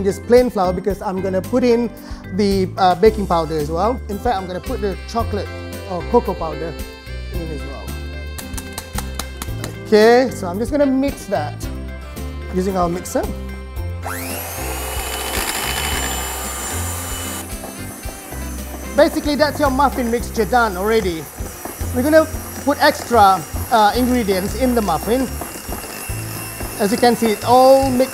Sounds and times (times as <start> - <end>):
Speech: 0.0 - 6.8, 7.4 - 7.9, 9.9 - 11.7, 12.5 - 13.3, 19.0 - 21.3, 22.0 - 25.4, 26.8 - 28.1
Music: 0.0 - 28.1.